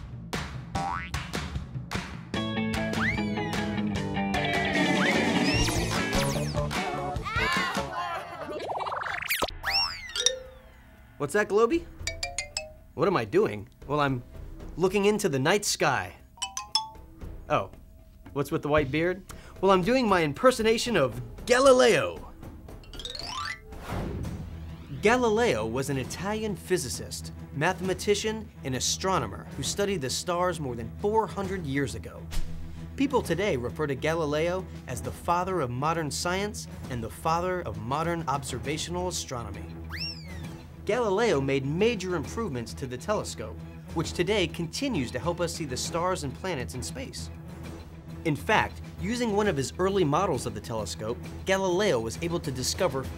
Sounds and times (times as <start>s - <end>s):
Music: 0.0s - 53.1s
Speech: 11.2s - 11.9s, 13.0s - 14.2s, 14.8s - 16.2s, 17.5s - 17.7s, 18.4s - 22.3s, 25.0s - 32.2s, 33.0s - 39.7s, 40.9s - 47.3s, 48.3s - 53.1s.